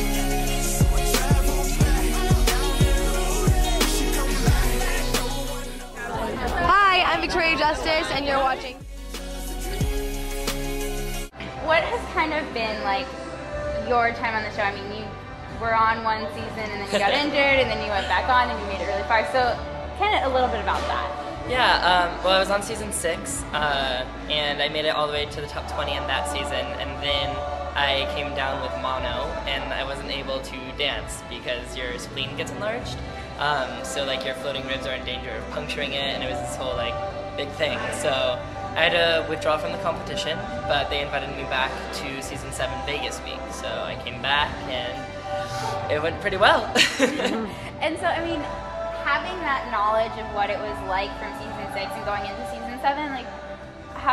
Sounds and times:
Music: 0.0s - 54.1s.

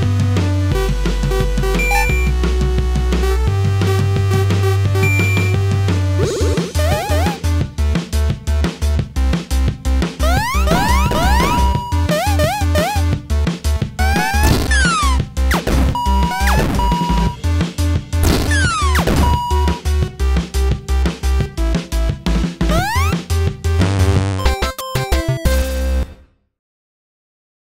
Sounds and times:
Music: 0.0s - 26.6s.

